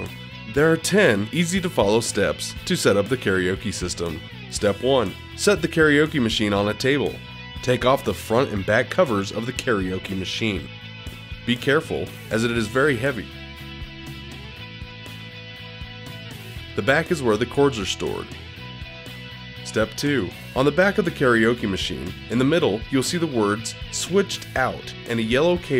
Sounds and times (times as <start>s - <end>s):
Speech: 0.0s - 10.7s, 11.5s - 13.3s, 16.8s - 18.3s, 19.6s - 25.7s
Pop music: 0.0s - 25.7s
Rhythm and blues: 0.0s - 25.7s.